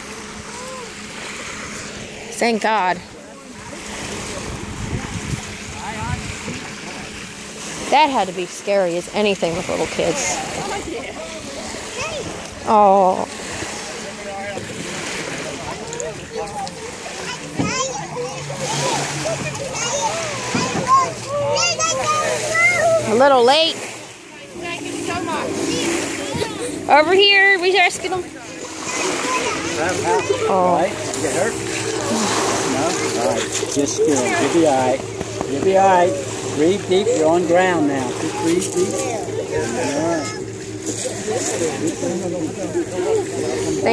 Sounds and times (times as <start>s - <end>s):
Boat, Water vehicle: 0.0s - 43.9s
Ocean: 0.0s - 43.9s.